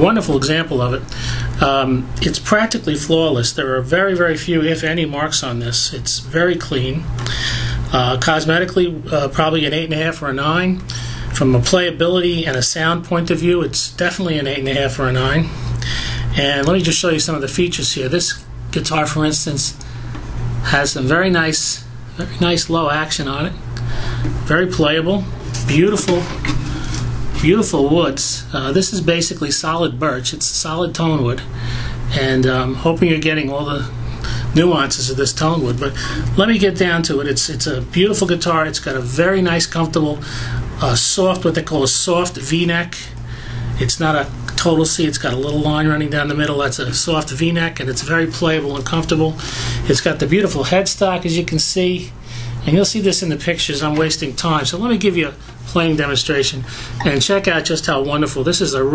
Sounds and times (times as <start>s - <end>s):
Speech: 0.0s - 7.1s, 7.9s - 15.6s, 16.3s - 19.8s, 20.6s - 23.6s, 24.4s - 26.6s, 27.4s - 31.5s, 32.1s - 43.2s, 43.8s - 58.9s.